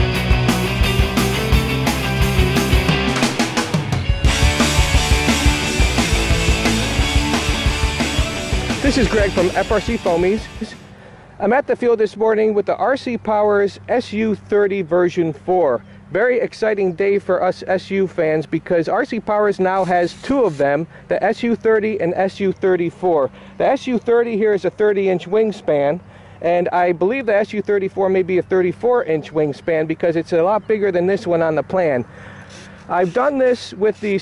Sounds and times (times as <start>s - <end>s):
Music: 0.0s - 10.9s
Speech: 8.8s - 10.8s, 11.4s - 32.1s, 32.9s - 34.2s.